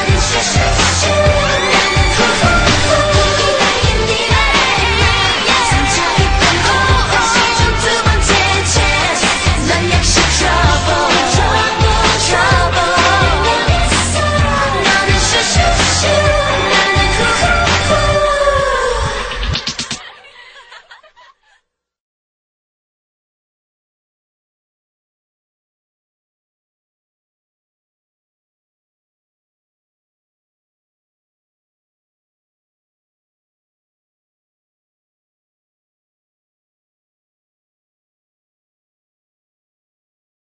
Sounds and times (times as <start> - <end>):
Pop music: 0.0 - 20.0
Singing: 0.0 - 20.2.